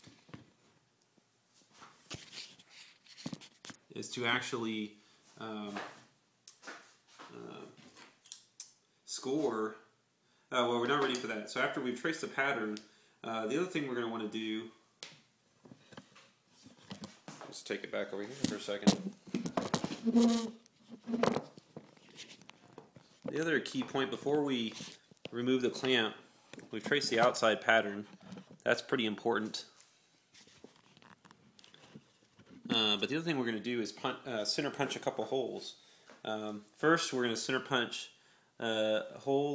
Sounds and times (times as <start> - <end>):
Inside, small room: 0.0 - 39.5
Speech: 3.9 - 6.0, 7.3 - 7.8, 9.1 - 9.9, 10.5 - 14.8, 17.5 - 19.1, 23.3 - 29.8, 32.7 - 39.5.